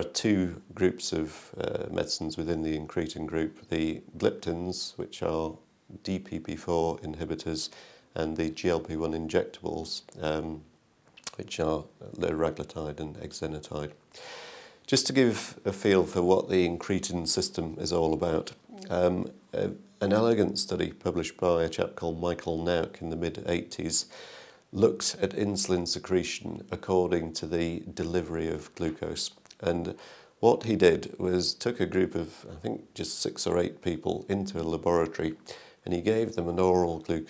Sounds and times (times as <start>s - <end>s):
Speech: 0.0s - 14.0s, 14.9s - 37.3s.